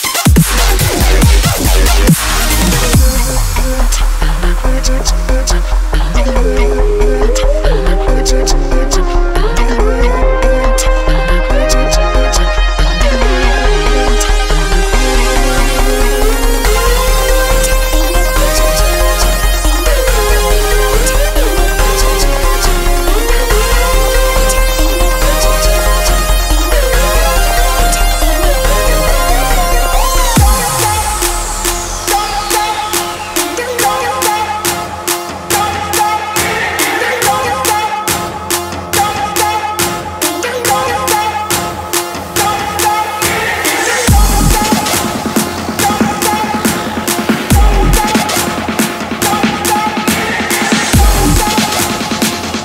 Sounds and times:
Dubstep: 0.0 - 52.6.

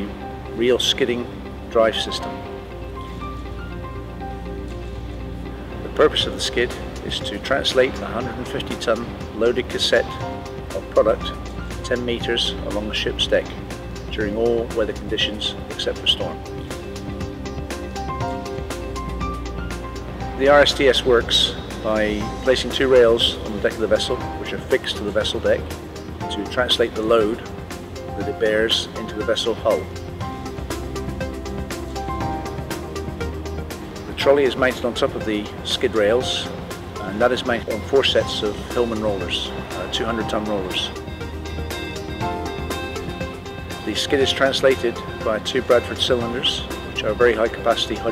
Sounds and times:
Speech: 0.0 - 2.3, 6.0 - 16.4, 20.4 - 25.7, 26.3 - 27.5, 28.2 - 29.9, 34.2 - 41.0, 43.9 - 48.1
Music: 0.0 - 48.1.

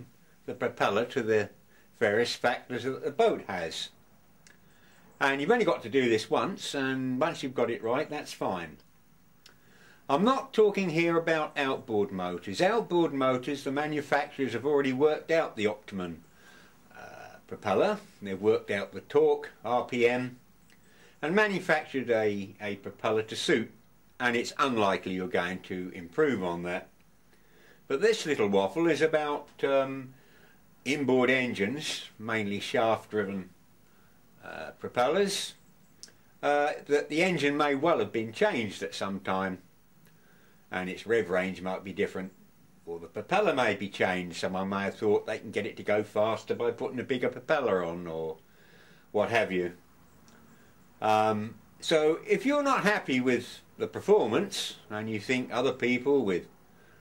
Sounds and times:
Speech: 0.0 - 4.0, 5.2 - 8.9, 10.1 - 16.2, 16.9 - 20.4, 21.2 - 26.9, 27.9 - 30.2, 30.8 - 33.6, 34.4 - 35.6, 36.4 - 39.7, 40.7 - 48.4, 49.1 - 49.8, 51.0 - 56.5.

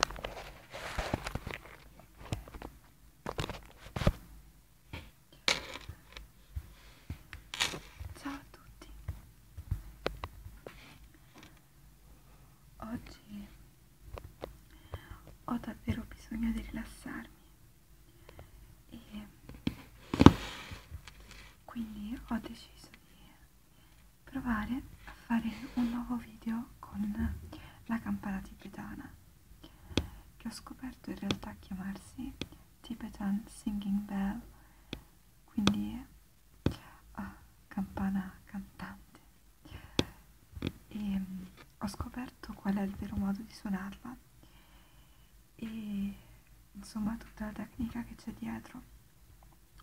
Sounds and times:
Speech: 8.1 - 9.0, 12.8 - 13.6, 15.5 - 17.3, 21.7 - 23.0, 24.3 - 29.2, 30.4 - 34.5, 35.5 - 36.1, 37.1 - 39.0, 40.9 - 44.2, 45.6 - 48.9.

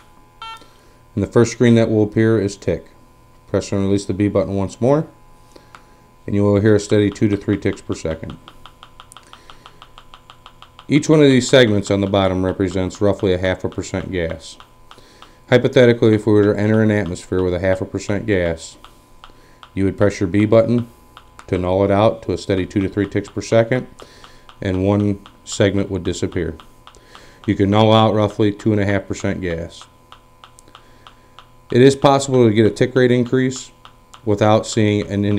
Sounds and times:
Speech: 1.2 - 5.2, 6.3 - 8.4, 10.9 - 14.6, 15.5 - 18.8, 19.8 - 20.9, 21.5 - 23.9, 24.6 - 26.6, 27.4 - 29.9, 31.7 - 35.3.

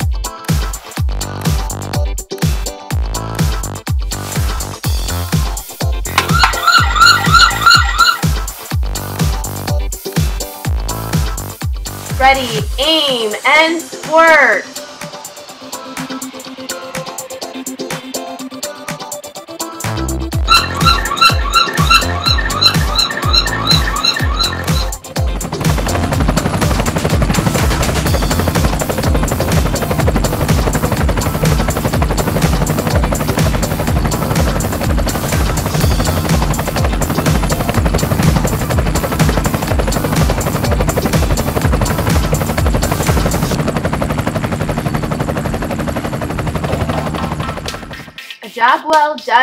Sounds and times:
Music: 0.0 - 49.4
Helicopter: 4.7 - 9.6, 20.4 - 48.2.

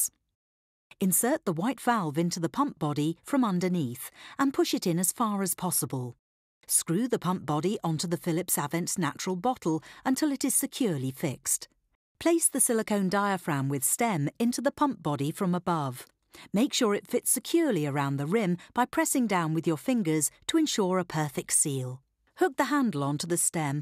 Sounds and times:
Speech: 1.0 - 23.8.

